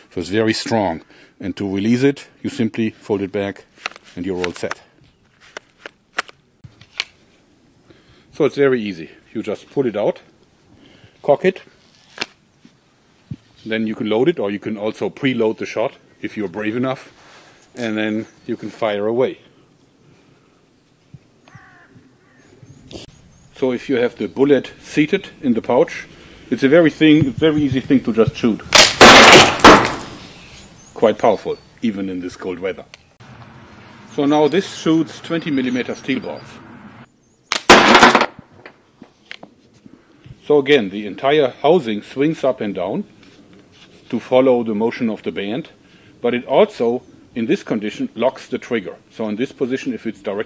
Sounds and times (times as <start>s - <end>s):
Speech: 0.1s - 4.9s, 8.3s - 10.3s, 11.2s - 11.7s, 13.6s - 17.2s, 17.8s - 19.5s, 23.6s - 28.7s, 31.0s - 32.9s, 34.1s - 36.6s, 40.4s - 43.1s, 44.1s - 50.4s.